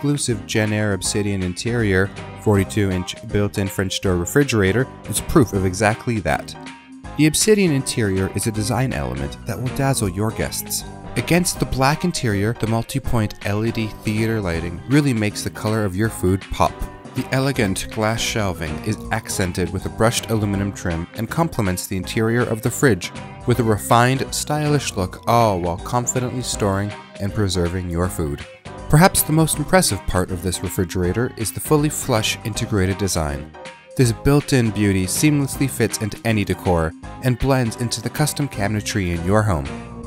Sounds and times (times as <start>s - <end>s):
Speech: 0.0s - 6.6s, 7.2s - 39.8s
Music: 0.0s - 40.0s.